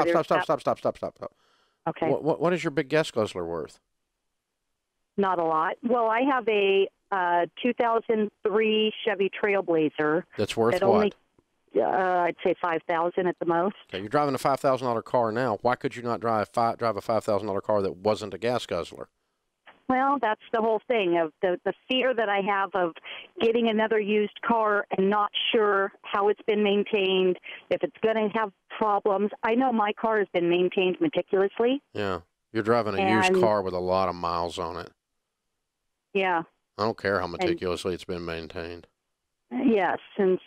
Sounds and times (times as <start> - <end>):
Speech: 0.0 - 1.3, 1.9 - 3.8, 5.2 - 11.1, 11.8 - 19.1, 19.8 - 34.9, 36.2 - 38.8, 39.6 - 40.4.